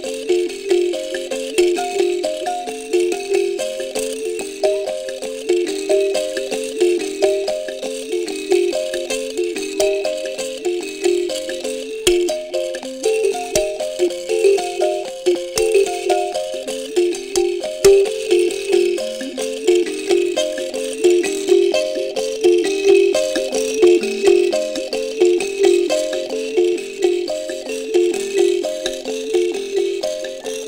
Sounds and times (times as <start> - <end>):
Music of Africa: 0.0 - 30.6.